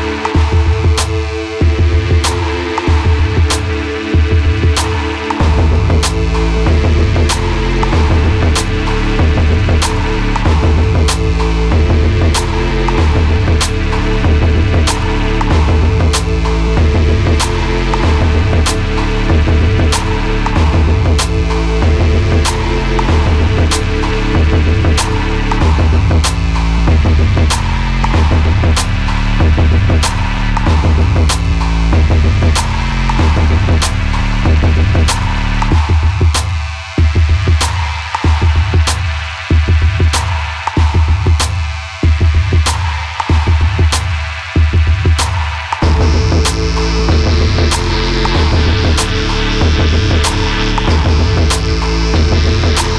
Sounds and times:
Music: 0:00.0 - 0:52.9.

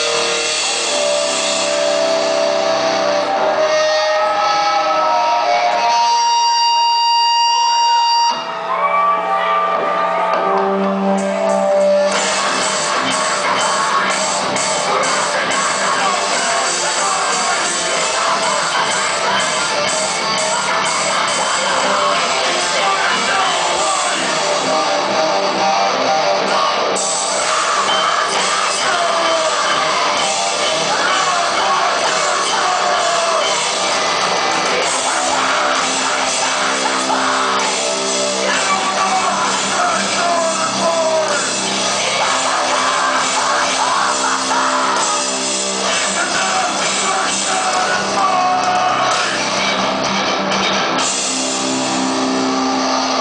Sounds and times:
Music: 0:00.0 - 0:53.2.

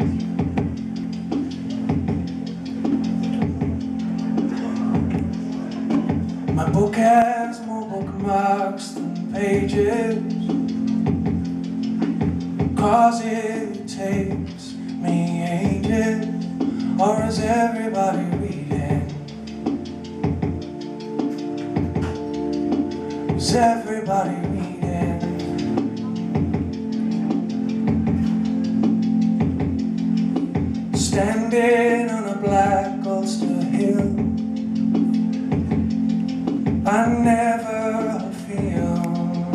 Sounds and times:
Music: 0:00.0 - 0:39.5.

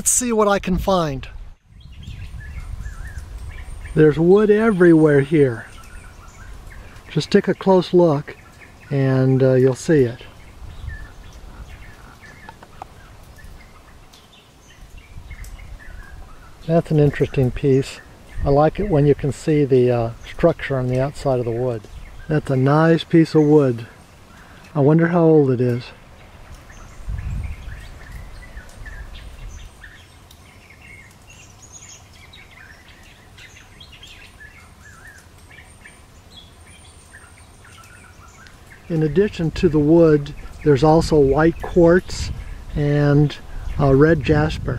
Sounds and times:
Speech: 0:00.0 - 0:01.4, 0:04.0 - 0:05.7, 0:07.1 - 0:10.3, 0:16.7 - 0:23.9, 0:24.8 - 0:26.0, 0:38.9 - 0:44.7.

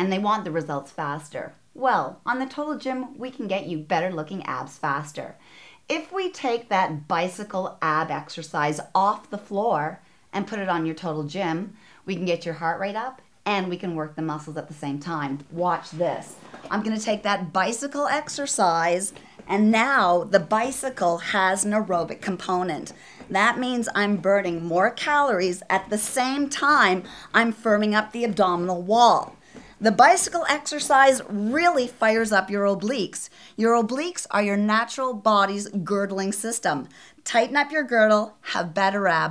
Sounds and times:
Speech: 0:00.0 - 0:39.3.

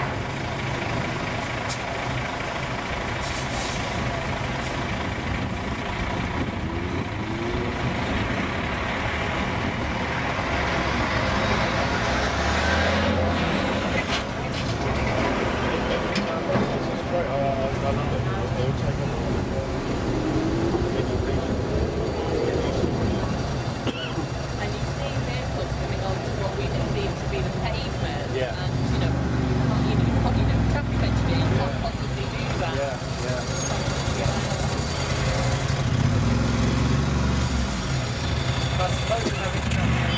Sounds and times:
Car: 0:00.0 - 0:40.1
Outside, urban or manmade: 0:00.0 - 0:40.1.

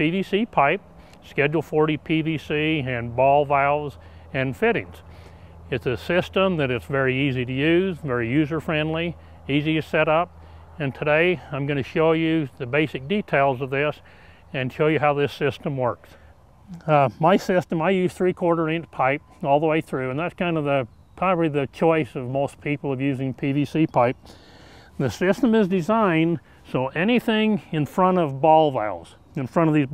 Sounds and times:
Speech: 0:00.0 - 0:05.0, 0:05.7 - 0:14.0, 0:14.6 - 0:16.0, 0:16.7 - 0:24.2, 0:25.0 - 0:29.9.

